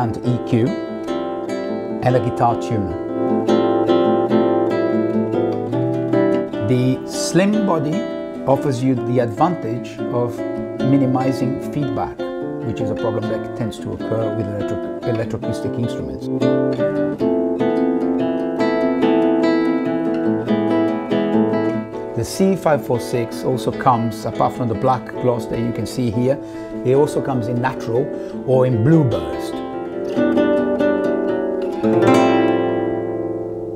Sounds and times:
Speech: 0.0s - 0.8s, 2.0s - 3.0s, 6.6s - 16.5s, 22.2s - 29.6s
Acoustic guitar: 0.0s - 33.7s
Classical music: 0.0s - 33.7s
Strum: 0.0s - 33.7s.

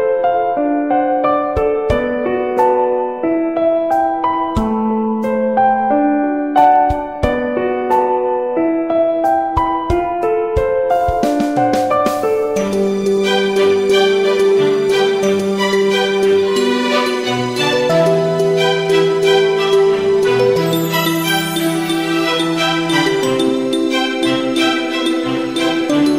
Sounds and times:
Wedding music: 11.1s - 26.1s.

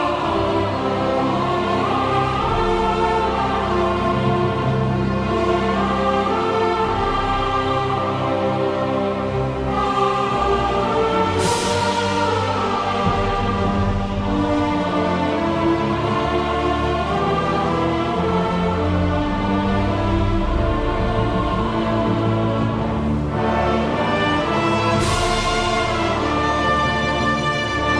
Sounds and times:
Theme music: 0.0s - 27.9s.

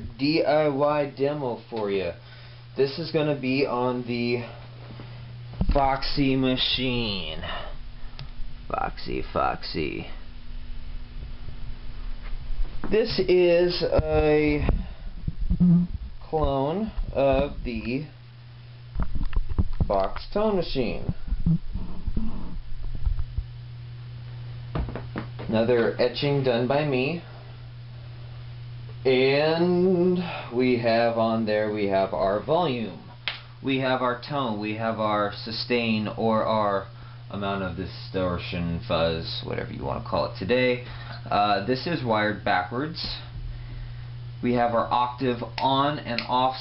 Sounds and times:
Speech: 0.0s - 2.2s, 2.8s - 4.6s, 5.6s - 7.7s, 8.7s - 10.2s, 12.9s - 14.8s, 16.2s - 18.2s, 19.9s - 21.2s, 25.5s - 27.3s, 29.0s - 43.3s, 44.4s - 46.6s.

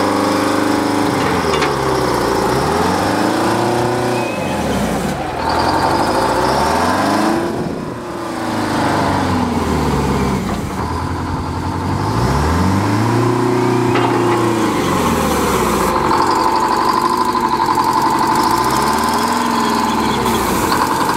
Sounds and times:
Outside, urban or manmade: 0.0s - 21.1s
Truck: 0.0s - 21.1s.

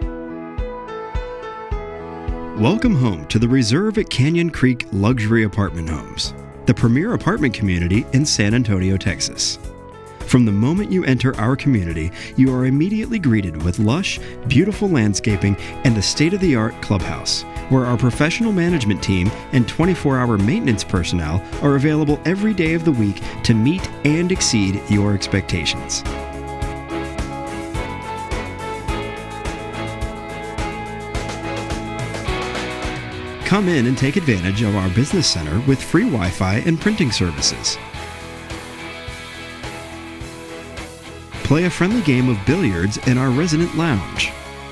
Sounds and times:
Music: 0.0s - 44.7s
Speech: 2.6s - 9.6s, 10.3s - 26.0s, 33.4s - 37.8s, 41.4s - 44.4s.

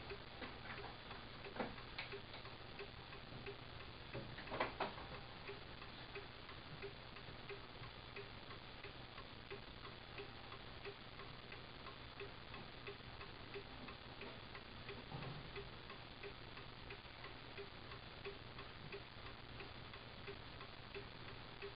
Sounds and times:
Tick-tock: 0.0s - 21.7s.

